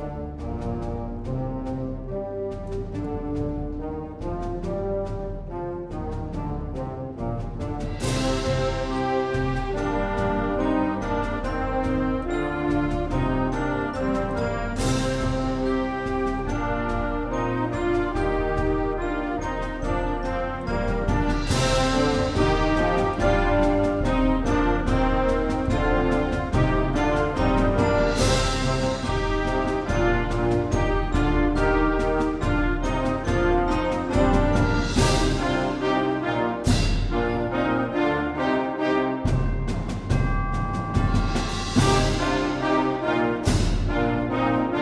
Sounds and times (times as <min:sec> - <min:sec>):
Theme music: 0:00.0 - 0:44.8
Trumpet: 0:00.0 - 0:44.8.